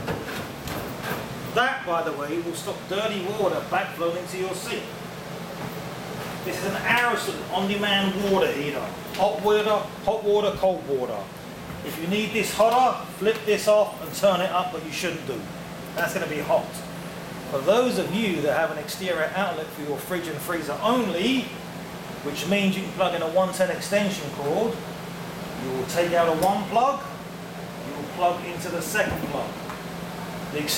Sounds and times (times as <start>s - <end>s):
Speech: 1.6s - 5.0s, 6.4s - 16.9s, 17.5s - 21.6s, 22.2s - 24.8s, 25.6s - 27.2s, 27.8s - 29.6s, 30.5s - 30.7s.